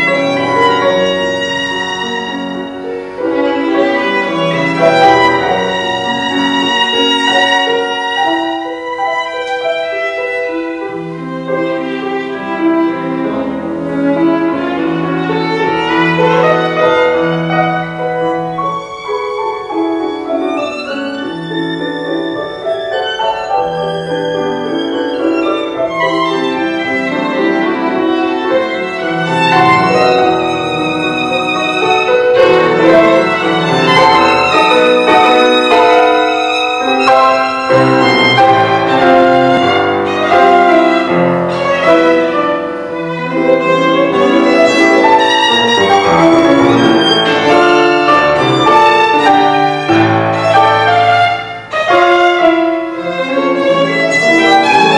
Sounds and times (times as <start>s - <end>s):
Violin, fiddle: 0.0s - 54.9s.